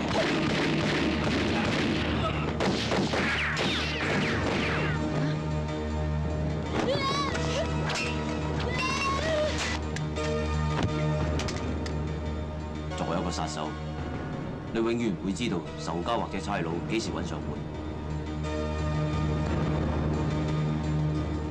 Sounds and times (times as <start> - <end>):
Music: 0.0 - 21.5.